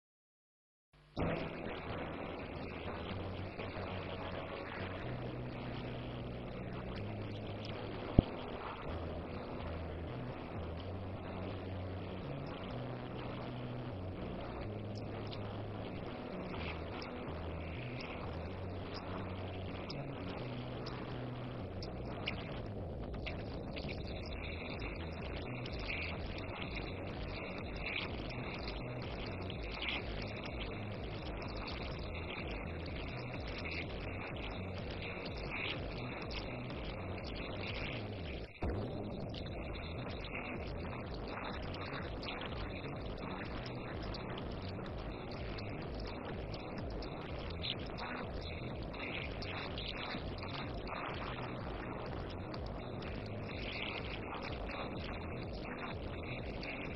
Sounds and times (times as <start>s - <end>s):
Music: 1.0s - 56.9s.